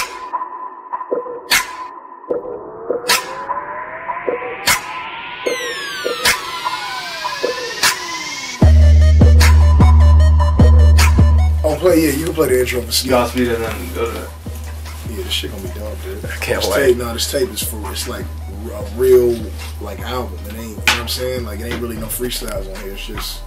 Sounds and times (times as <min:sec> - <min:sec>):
Music: 0:00.0 - 0:23.4
Speech: 0:11.6 - 0:14.4, 0:15.0 - 0:23.4.